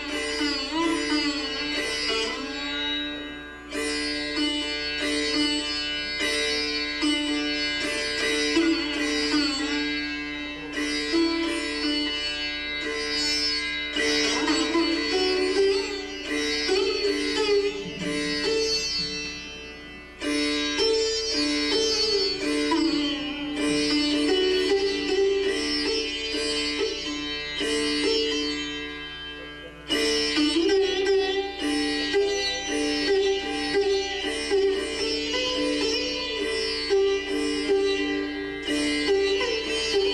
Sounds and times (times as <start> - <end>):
Carnatic music: 0.0 - 40.1
Sitar: 0.0 - 40.1.